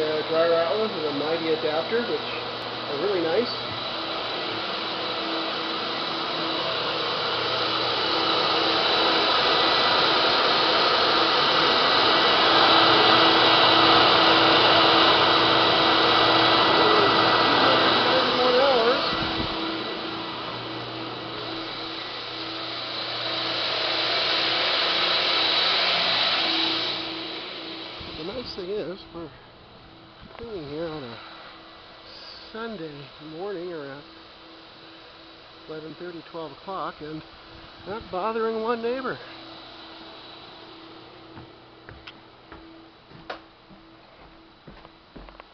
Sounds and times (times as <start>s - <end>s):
Speech: 0.0s - 3.7s, 17.6s - 19.1s, 28.2s - 29.4s, 30.3s - 31.2s, 32.1s - 34.1s, 35.7s - 37.2s, 37.8s - 39.3s.